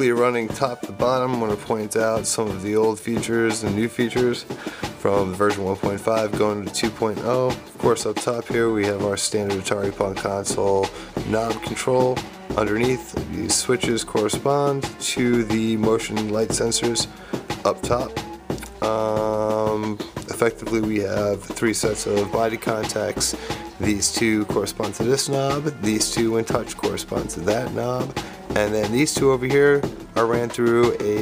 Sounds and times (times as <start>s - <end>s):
Music: 0.0s - 31.2s
Speech: 0.0s - 31.2s.